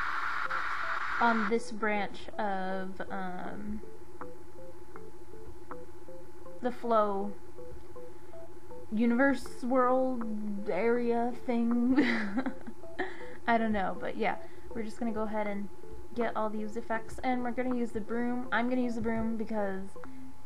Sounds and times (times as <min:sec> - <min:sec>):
Music: 0:00.0 - 0:20.4
Speech: 0:01.2 - 0:03.8, 0:06.6 - 0:07.4, 0:09.0 - 0:12.1, 0:13.5 - 0:20.0.